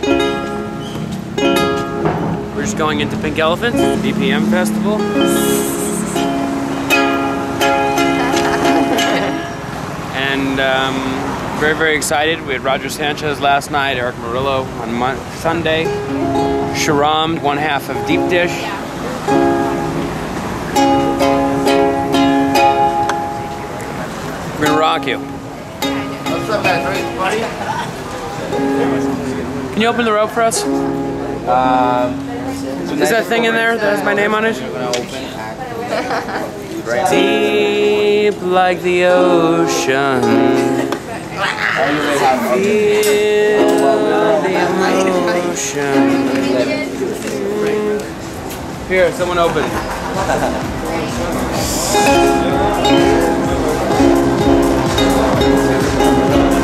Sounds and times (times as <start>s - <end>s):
Music: 0.0s - 9.8s, 15.8s - 24.0s, 24.6s - 27.5s, 28.4s - 34.2s, 37.1s - 41.1s, 42.1s - 56.6s.